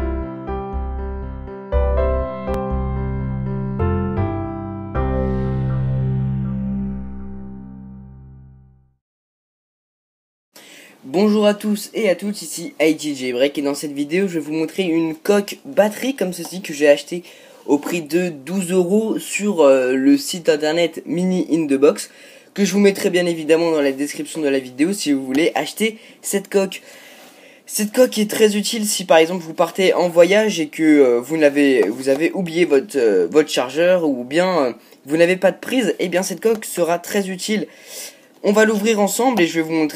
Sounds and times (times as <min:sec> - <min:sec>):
Speech: 0:11.0 - 0:26.8, 0:27.7 - 0:37.7, 0:38.4 - 0:39.9.